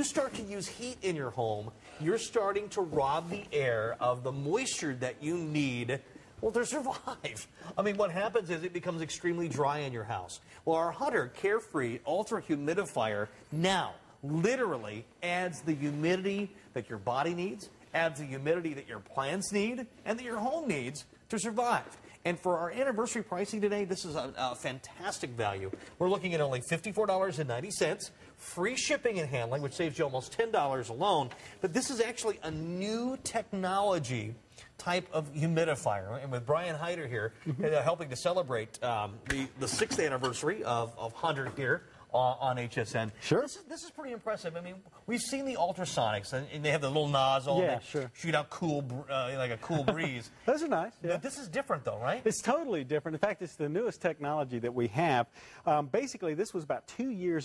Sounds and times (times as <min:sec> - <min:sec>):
Speech: 0:00.0 - 0:57.4.